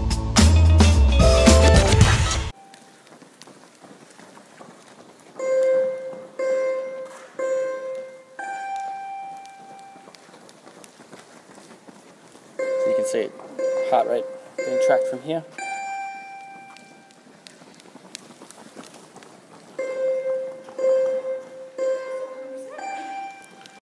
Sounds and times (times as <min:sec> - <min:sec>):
Beep, bleep: 0:05.4 - 0:10.1, 0:12.6 - 0:17.1, 0:19.8 - 0:23.8
Speech: 0:12.9 - 0:15.5.